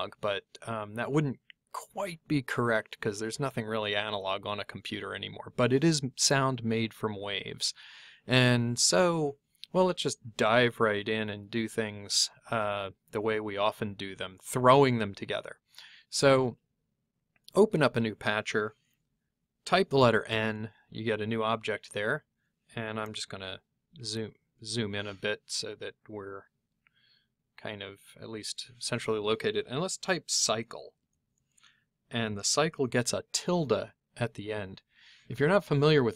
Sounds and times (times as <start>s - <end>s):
Speech: 0.0s - 16.6s, 17.5s - 18.8s, 19.6s - 26.5s, 27.6s - 31.0s, 32.1s - 36.1s.